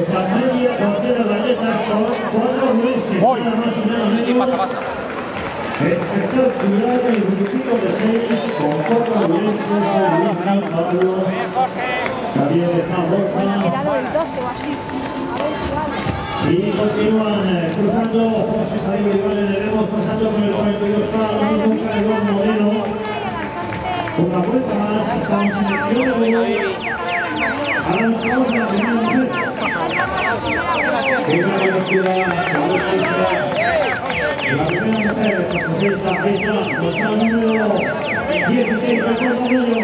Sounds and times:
Run: 1.8s - 26.9s, 27.5s - 39.8s
Speech: 5.8s - 39.8s.

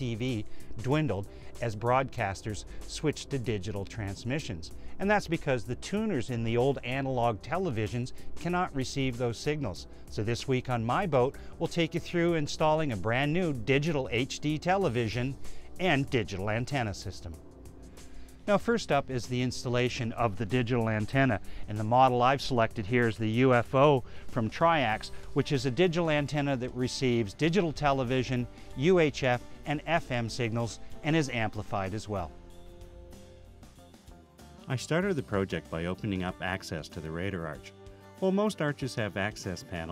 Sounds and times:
Speech: 0.0s - 17.4s, 18.5s - 32.3s, 34.7s - 39.9s
Music: 0.0s - 39.9s.

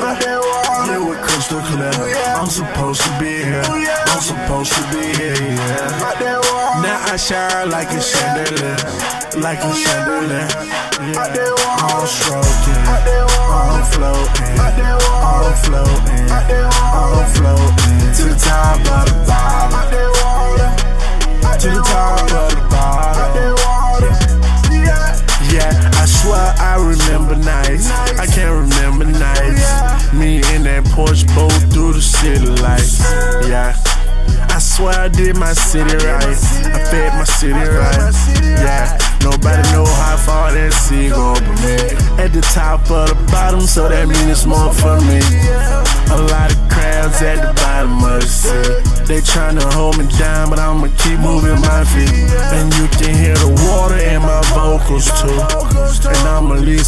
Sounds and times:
Music: 0.0s - 56.8s.

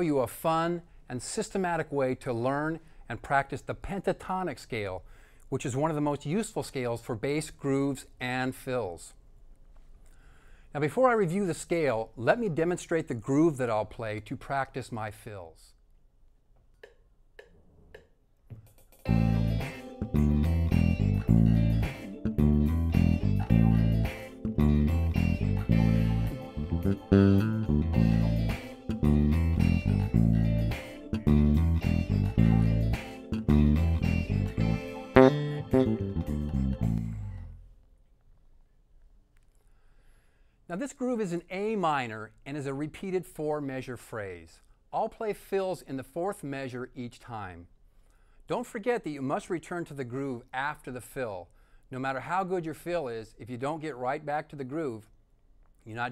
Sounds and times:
Bass guitar: 18.5s - 37.7s.

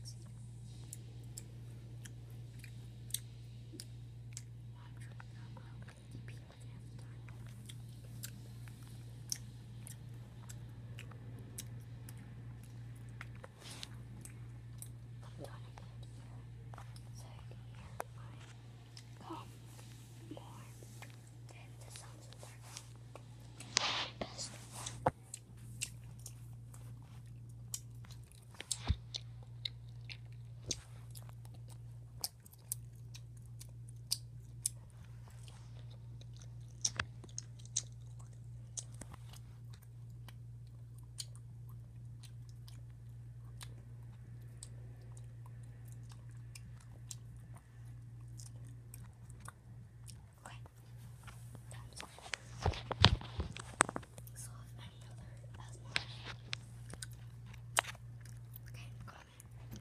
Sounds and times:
Whispering: 0.0s - 0.4s, 4.7s - 7.6s, 15.2s - 22.9s, 50.4s - 50.8s, 51.6s - 52.4s, 54.3s - 56.4s, 58.7s - 59.8s.

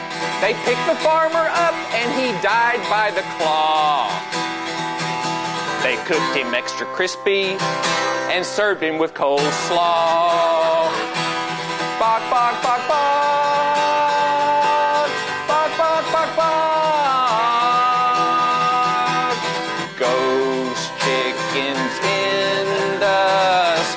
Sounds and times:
Musical instrument: 0.0s - 8.8s, 9.4s - 23.9s.

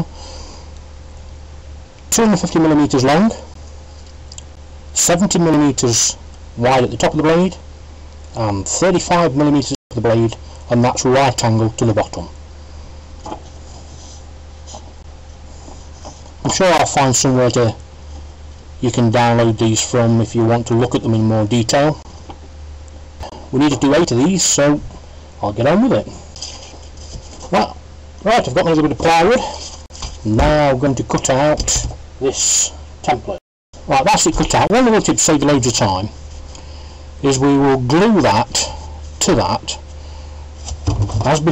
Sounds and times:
Speech: 2.1s - 3.5s, 5.0s - 7.6s, 8.4s - 12.4s, 16.4s - 17.8s, 18.8s - 22.0s, 23.5s - 26.2s, 27.5s - 29.6s, 30.2s - 36.2s, 37.2s - 39.8s, 41.1s - 41.5s.

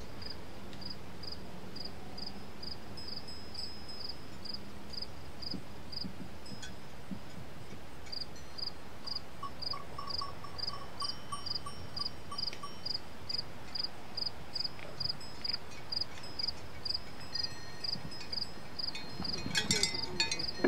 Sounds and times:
Insect: 0.0s - 20.6s
Outside, rural or natural: 0.0s - 20.6s.

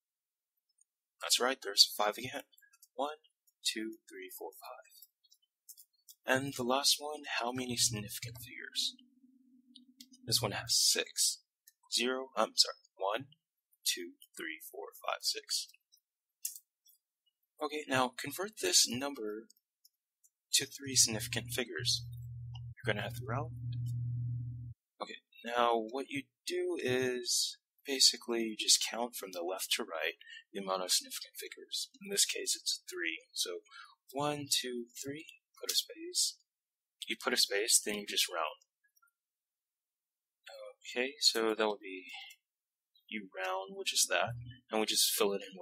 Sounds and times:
Inside, small room: 0.6s - 39.3s
Speech: 1.2s - 5.0s, 6.2s - 9.0s, 10.2s - 15.8s, 17.6s - 19.6s, 20.5s - 24.4s, 25.0s - 38.7s, 40.4s - 42.4s, 43.1s - 45.6s.

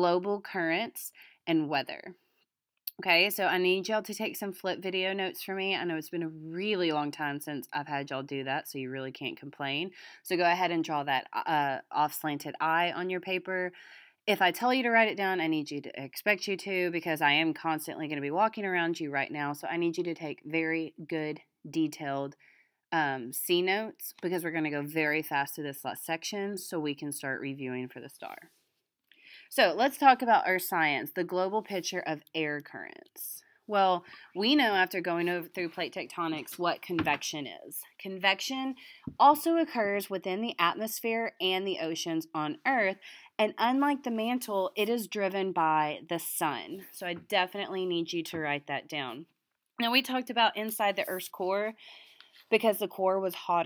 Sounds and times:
Speech: 0.0s - 2.2s, 2.9s - 22.4s, 23.0s - 28.5s, 29.5s - 51.8s, 52.5s - 53.6s.

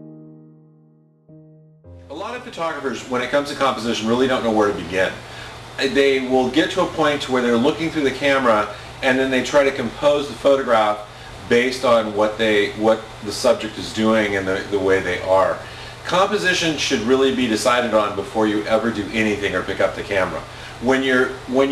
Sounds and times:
Music: 0.0s - 2.8s
Speech: 2.1s - 21.7s.

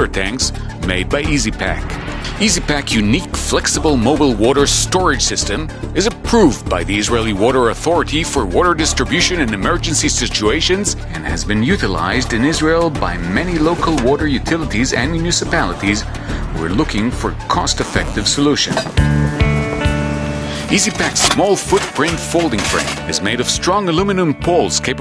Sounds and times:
Speech: 0.0s - 18.9s, 20.6s - 25.0s
Music: 0.0s - 25.0s.

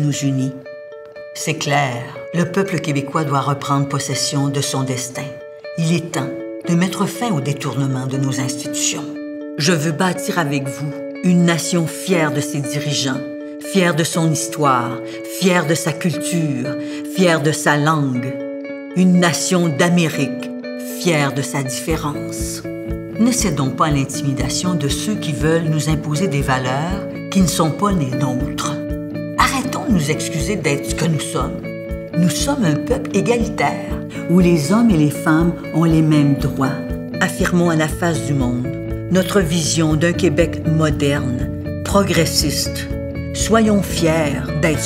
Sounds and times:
Speech: 0.0s - 0.6s, 1.4s - 18.4s, 19.0s - 44.8s
Music: 0.0s - 44.8s.

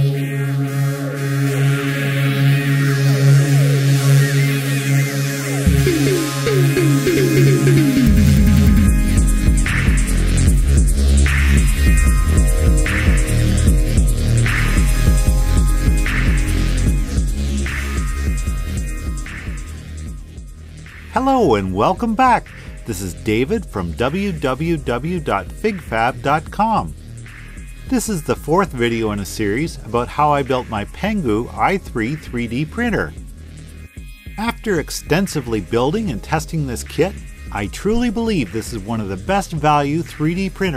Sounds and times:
Throbbing: 5.6s - 20.4s.

